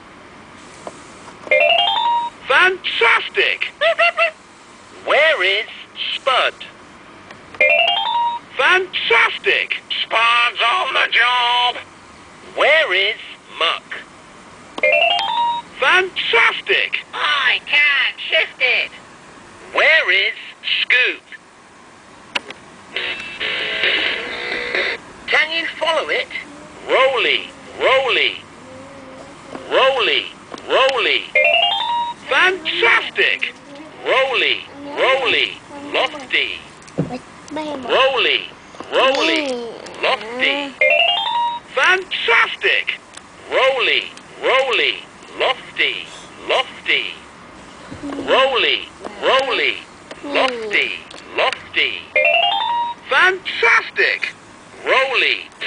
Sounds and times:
Music: 23.4 - 25.0.

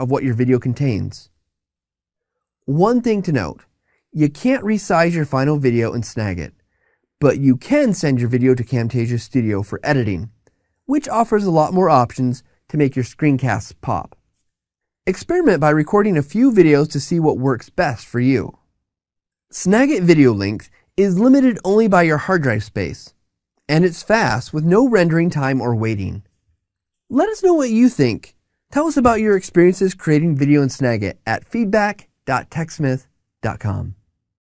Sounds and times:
Speech: 0.0 - 1.3, 2.7 - 6.6, 7.2 - 14.2, 15.1 - 18.6, 19.5 - 26.3, 27.1 - 34.0.

